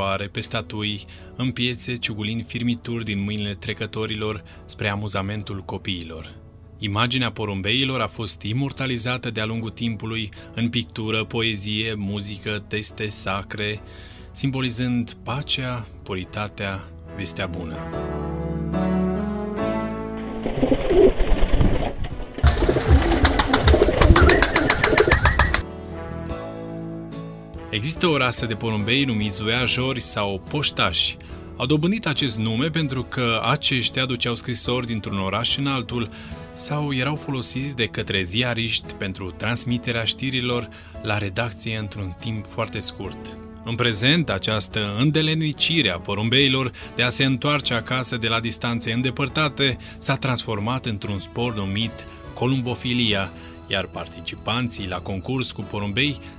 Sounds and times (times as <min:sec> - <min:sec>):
Speech: 0:00.0 - 0:13.8, 0:14.4 - 0:17.9, 0:27.7 - 0:56.2
Music: 0:00.0 - 0:56.3.